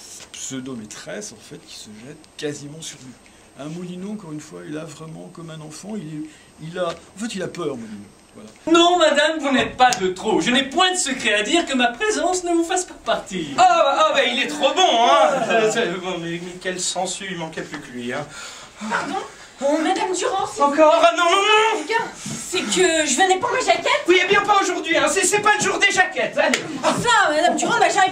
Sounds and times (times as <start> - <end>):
Speech: 0.4 - 18.3, 18.9 - 28.1.